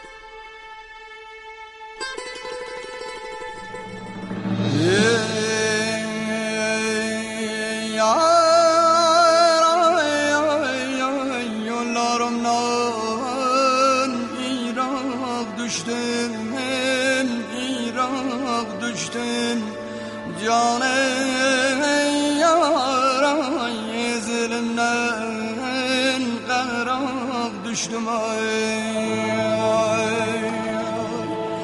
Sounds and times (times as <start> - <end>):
Sad music: 0.0 - 31.6.